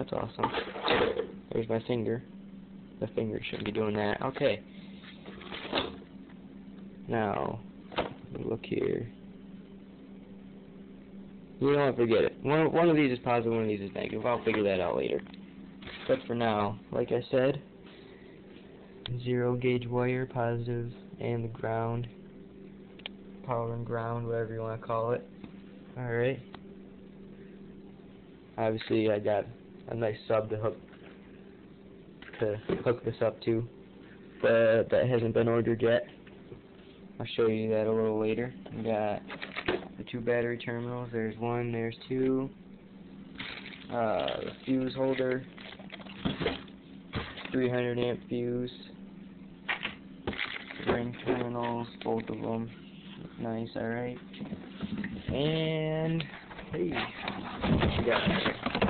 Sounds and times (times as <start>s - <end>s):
Speech: 0.0s - 0.6s, 1.5s - 2.3s, 3.0s - 4.7s, 7.1s - 7.6s, 8.3s - 9.2s, 11.6s - 15.3s, 16.0s - 17.7s, 19.1s - 22.2s, 23.4s - 25.3s, 26.0s - 26.5s, 28.6s - 30.8s, 32.3s - 33.7s, 34.4s - 36.2s, 37.2s - 39.3s, 40.0s - 42.6s, 43.9s - 45.5s, 47.5s - 49.0s, 50.8s - 52.8s, 53.4s - 54.3s, 55.2s - 57.2s, 57.8s - 58.5s
Inside, small room: 0.0s - 58.8s.